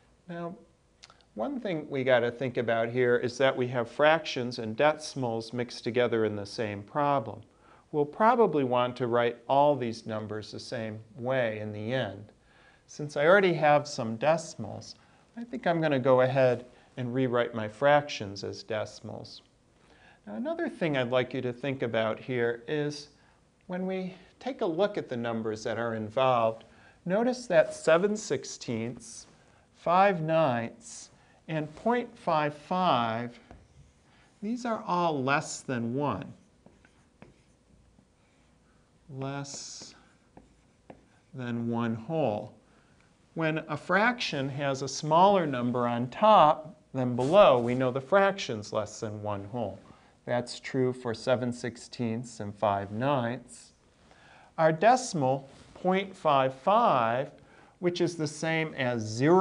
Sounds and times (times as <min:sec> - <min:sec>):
Speech: 0:00.3 - 0:19.5, 0:20.2 - 0:33.6, 0:34.4 - 0:36.4, 0:39.1 - 0:40.2, 0:41.3 - 0:42.6, 0:43.4 - 0:53.8, 0:54.6 - 0:59.4.